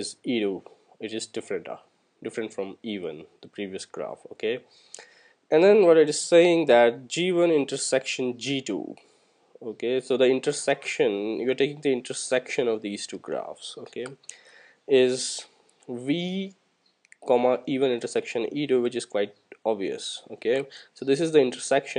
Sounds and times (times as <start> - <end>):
Speech: 0.0 - 4.7, 5.5 - 9.0, 9.6 - 14.2, 14.9 - 16.6, 17.2 - 21.9.